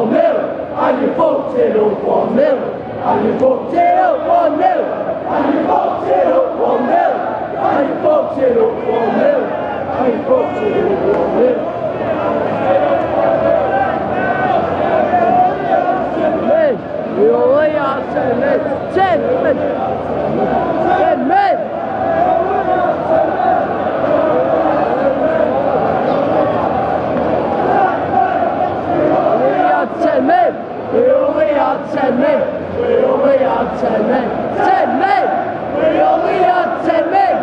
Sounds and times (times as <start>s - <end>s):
Speech: 0.0s - 21.7s, 29.2s - 37.4s.